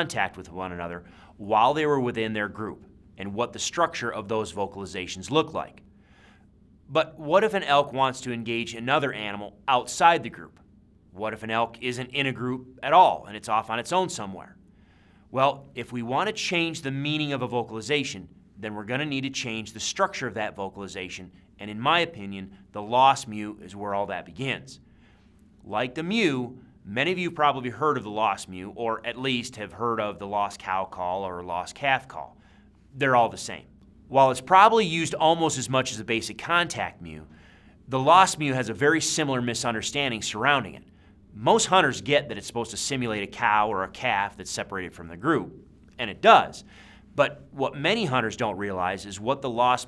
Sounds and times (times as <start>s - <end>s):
Speech: 0.0s - 5.8s, 6.9s - 14.6s, 15.3s - 24.8s, 25.6s - 32.4s, 33.0s - 37.3s, 37.9s - 49.8s.